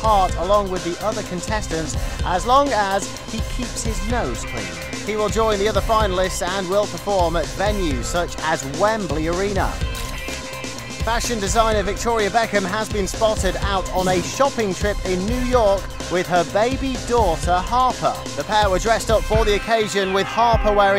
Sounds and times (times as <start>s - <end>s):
Speech: 0.0s - 4.4s, 5.1s - 9.8s, 11.1s - 20.9s
Music: 0.0s - 20.9s.